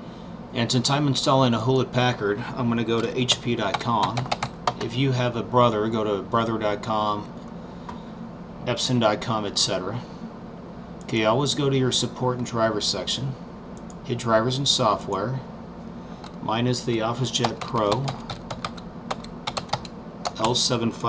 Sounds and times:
Speech: 0:00.5 - 0:07.3, 0:08.6 - 0:10.1, 0:11.1 - 0:13.4, 0:14.0 - 0:15.5, 0:16.4 - 0:18.2, 0:20.3 - 0:21.0.

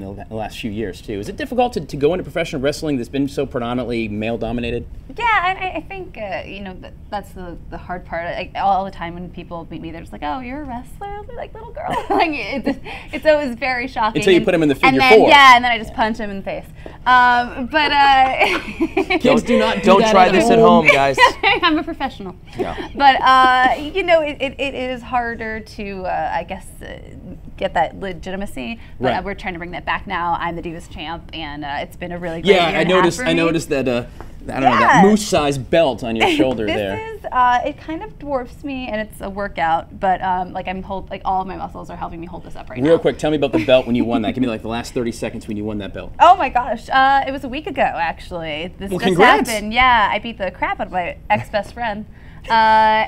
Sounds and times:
Speech: 0:14.1 - 0:15.6, 0:19.2 - 0:21.7, 0:29.0 - 0:29.3, 0:32.3 - 0:37.8, 0:42.8 - 0:46.4, 0:48.7 - 0:50.1.

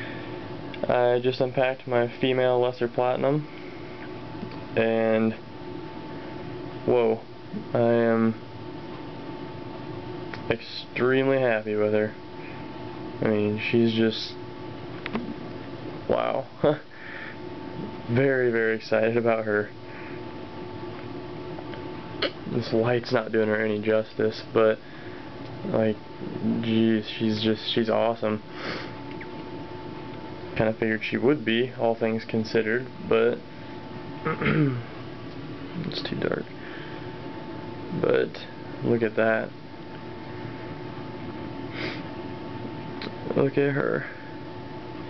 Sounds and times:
Inside, small room: 0:00.0 - 0:45.1
Speech: 0:00.8 - 0:03.5, 0:04.8 - 0:05.4, 0:06.9 - 0:08.4, 0:10.4 - 0:12.2, 0:13.2 - 0:14.4, 0:16.1 - 0:16.8, 0:18.1 - 0:19.7, 0:22.5 - 0:24.8, 0:25.7 - 0:28.4, 0:30.6 - 0:33.4, 0:35.8 - 0:36.5, 0:37.9 - 0:39.6, 0:43.3 - 0:44.2.

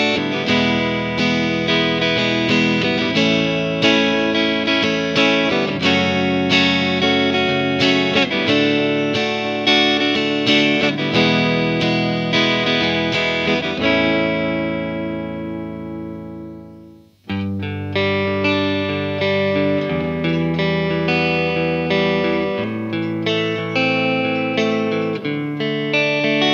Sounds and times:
Bass guitar: 0:00.0 - 0:26.5
Electric guitar: 0:00.0 - 0:26.5.

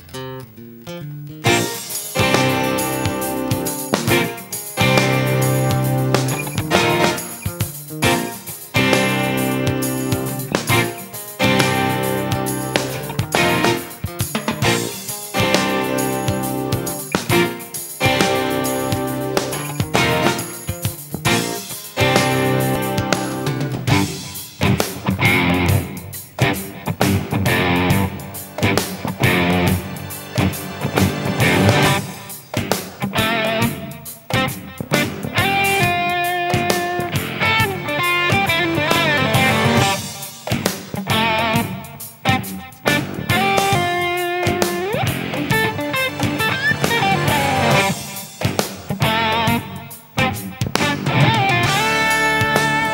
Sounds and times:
Music: 0:00.0 - 0:52.9.

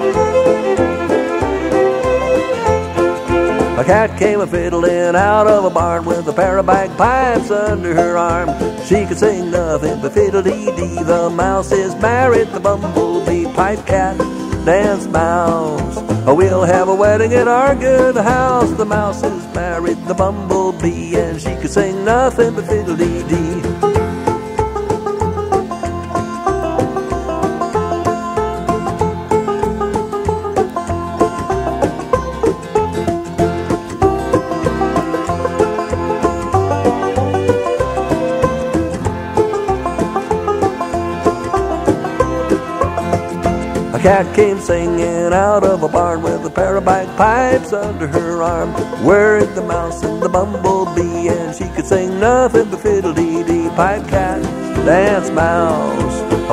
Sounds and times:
Pizzicato: 0:00.0 - 0:56.5.

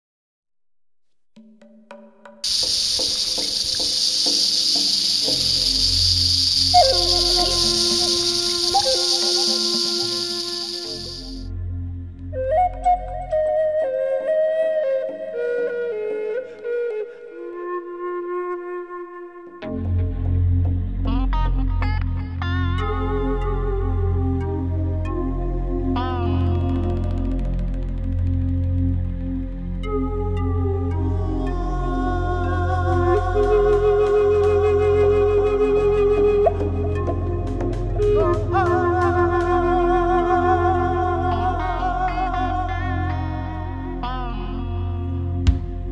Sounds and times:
Music: 0:01.4 - 0:45.9
Outside, rural or natural: 0:02.4 - 0:13.2, 0:25.9 - 0:42.7.

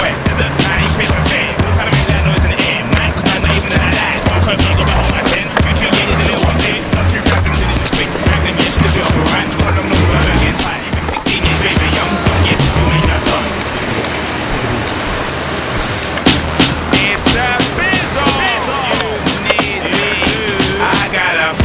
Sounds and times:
Music: 0:00.0 - 0:14.4, 0:15.8 - 0:21.6
Skateboard: 0:00.0 - 0:21.6.

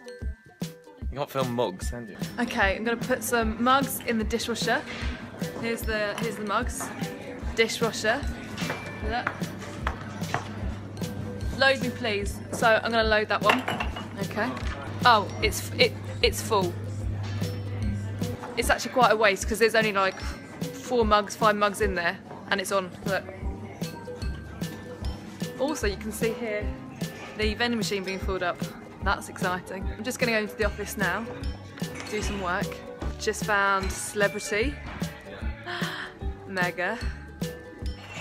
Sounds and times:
Music: 0:00.0 - 0:38.2
Inside, public space: 0:01.6 - 0:38.2.

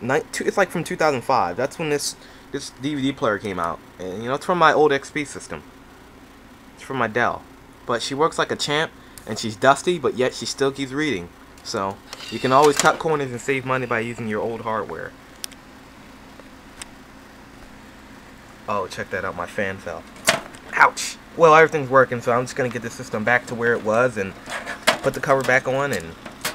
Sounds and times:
Speech: 0:00.0 - 0:05.6, 0:06.8 - 0:15.1, 0:18.7 - 0:20.0, 0:20.7 - 0:24.4, 0:25.0 - 0:26.2
Inside, small room: 0:00.0 - 0:26.5.

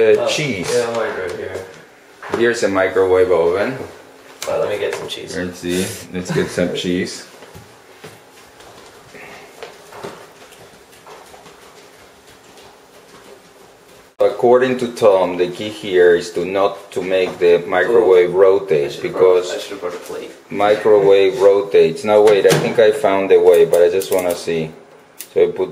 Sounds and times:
Speech: 0:00.0 - 0:07.3, 0:14.2 - 0:25.7.

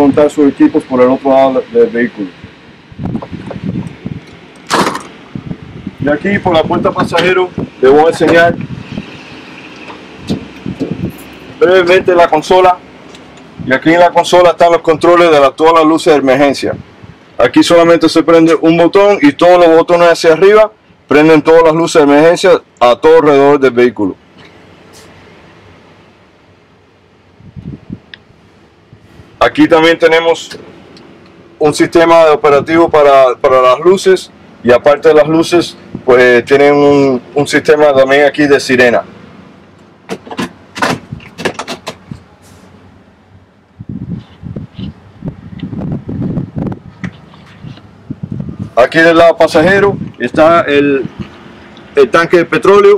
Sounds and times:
Speech: 0:00.0 - 0:02.4, 0:06.0 - 0:08.6, 0:11.6 - 0:12.8, 0:13.6 - 0:16.8, 0:17.4 - 0:24.2, 0:29.4 - 0:30.6, 0:31.6 - 0:39.1, 0:48.8 - 0:51.1, 0:52.0 - 0:52.9.

